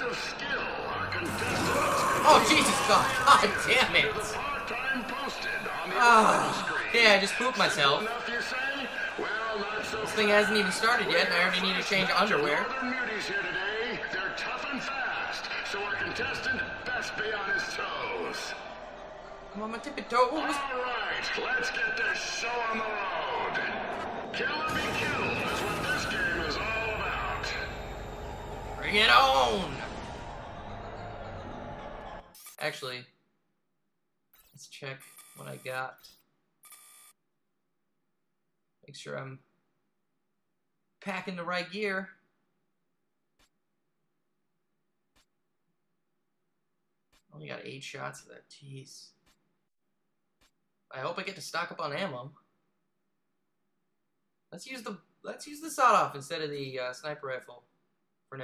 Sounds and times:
Speech: 0.0s - 18.6s, 19.6s - 23.8s, 24.4s - 27.8s, 28.8s - 29.9s, 32.6s - 33.2s, 34.6s - 36.2s, 38.8s - 39.4s, 41.0s - 42.2s, 47.3s - 49.2s, 50.9s - 52.4s, 54.5s - 57.6s.

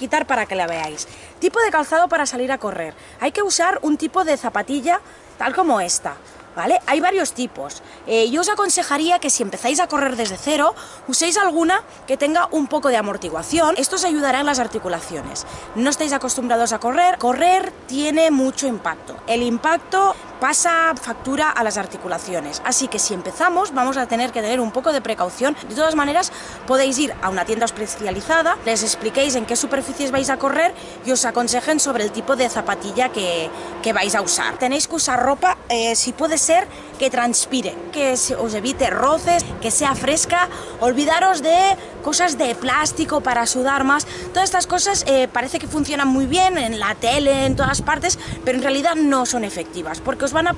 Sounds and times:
Speech: 0.0s - 50.5s.

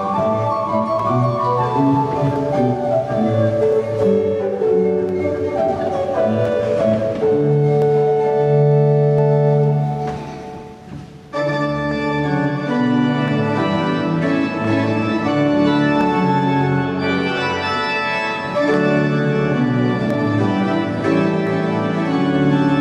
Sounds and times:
Piano: 0.0s - 22.8s.

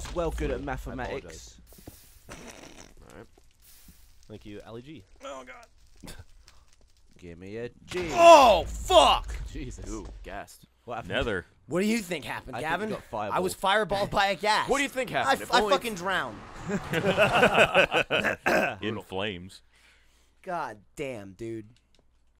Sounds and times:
Speech: 0.0s - 1.6s, 7.2s - 16.4s, 18.7s - 19.6s, 20.4s - 21.8s.

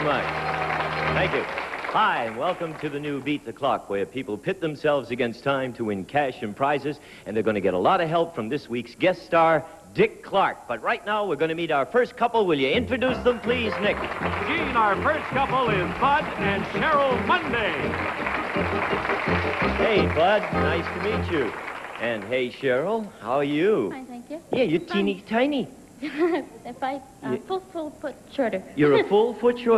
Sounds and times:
Music: 0.0s - 1.9s, 12.7s - 21.8s.

